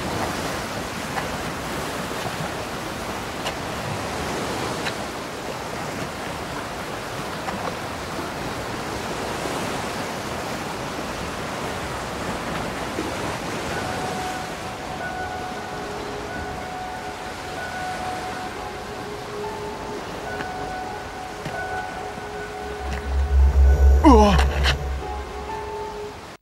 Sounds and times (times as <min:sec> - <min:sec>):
Music: 0:13.8 - 0:26.4.